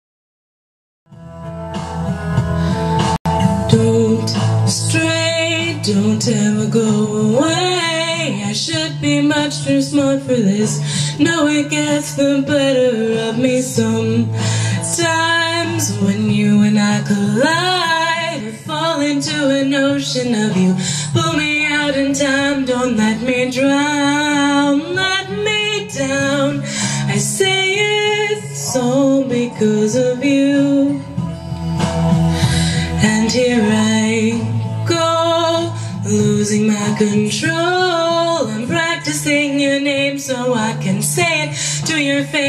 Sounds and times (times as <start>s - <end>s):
Music: 1.1s - 42.4s
Female singing: 3.4s - 31.2s, 33.0s - 42.4s.